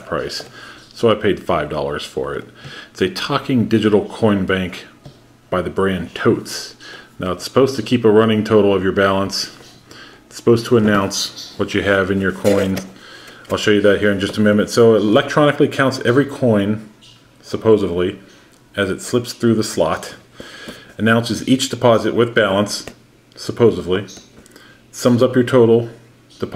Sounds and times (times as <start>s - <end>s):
Speech: 0.0s - 20.3s, 21.0s - 24.3s, 24.9s - 26.5s.